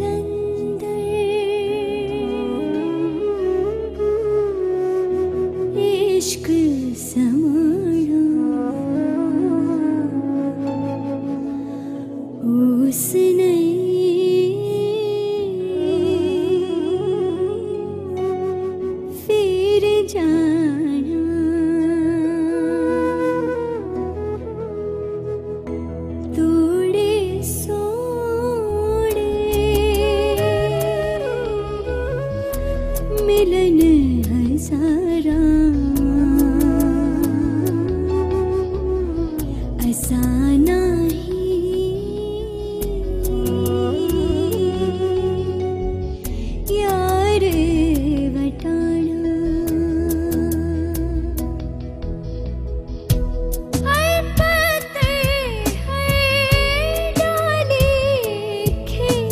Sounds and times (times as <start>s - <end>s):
Middle Eastern music: 0.0s - 59.3s.